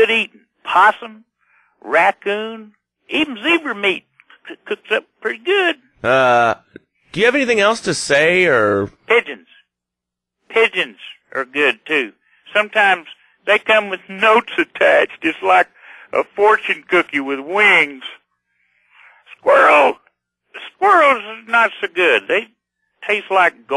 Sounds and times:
Speech: 0.0 - 9.6, 10.5 - 18.2, 19.3 - 23.7.

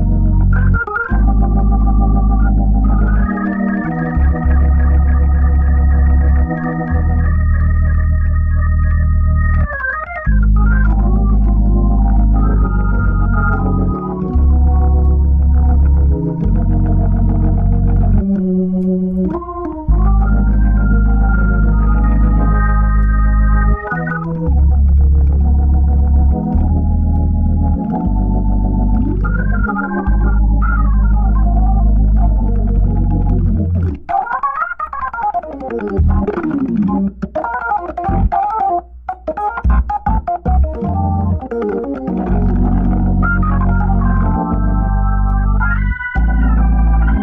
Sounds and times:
Hammond organ: 0.0 - 47.2
Piano: 0.0 - 47.2.

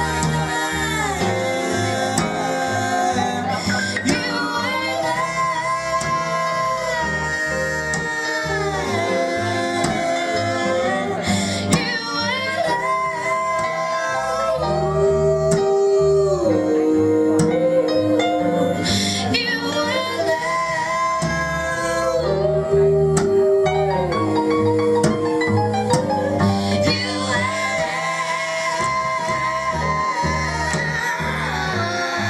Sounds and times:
Music: 0.0 - 32.3
Singing: 0.0 - 32.3.

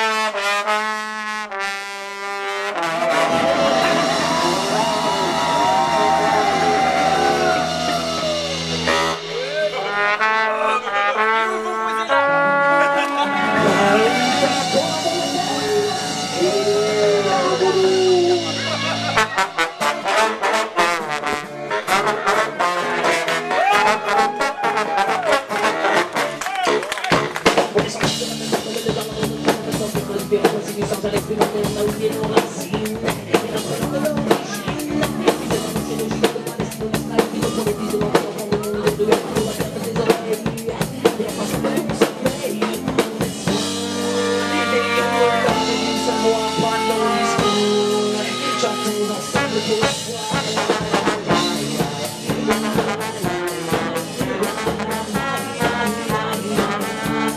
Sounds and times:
Music: 0.0 - 57.3
Speech: 8.8 - 19.4, 32.1 - 43.4.

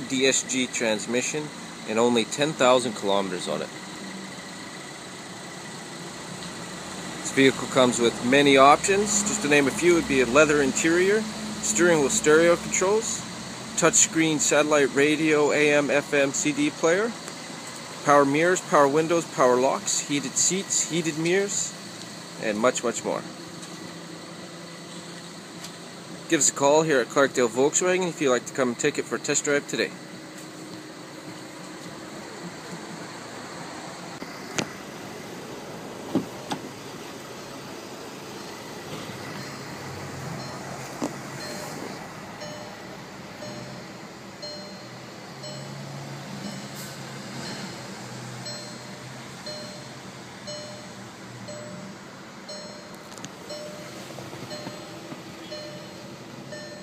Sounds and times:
Speech: 0.0 - 3.7, 7.3 - 13.2, 13.8 - 17.2, 18.1 - 21.8, 22.4 - 23.3, 26.3 - 30.0
Car: 0.0 - 56.8.

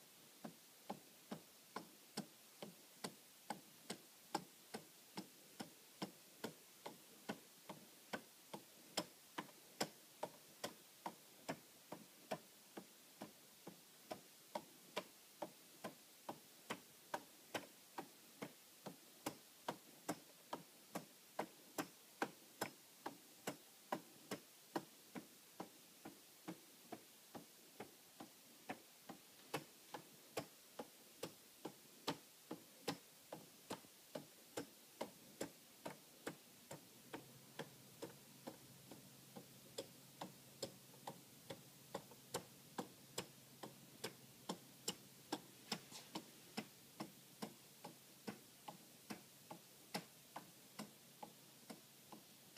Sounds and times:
Tick-tock: 0.4 - 52.5.

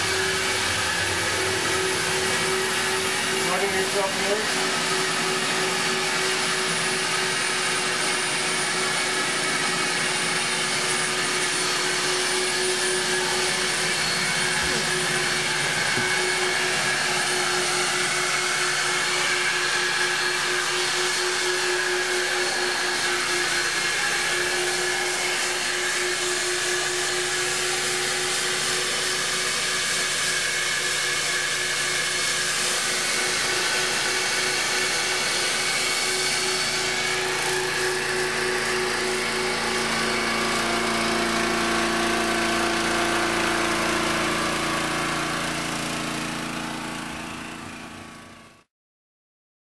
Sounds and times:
Vacuum cleaner: 0.0 - 48.7.

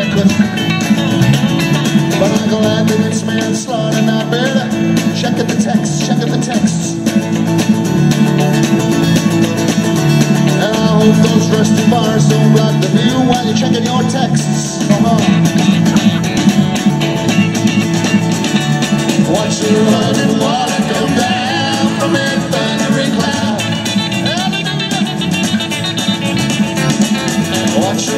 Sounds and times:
Music: 0.0 - 28.1
Singing: 19.2 - 25.2, 27.4 - 28.1.

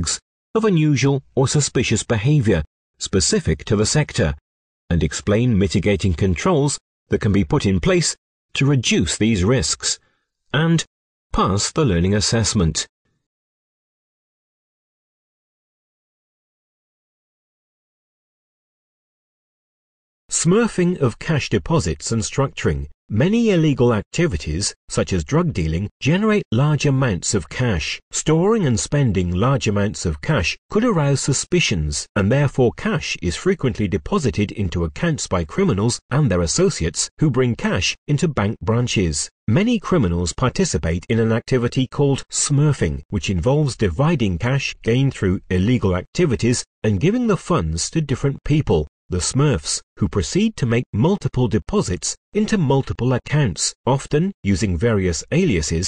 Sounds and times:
Speech synthesizer: 0.0 - 10.0, 10.6 - 12.9, 20.3 - 55.8.

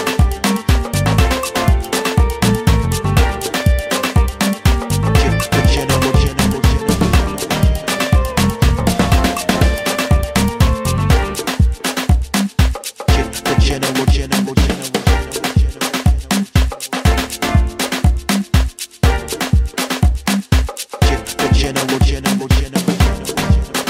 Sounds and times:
Afrobeat: 0.0 - 23.8.

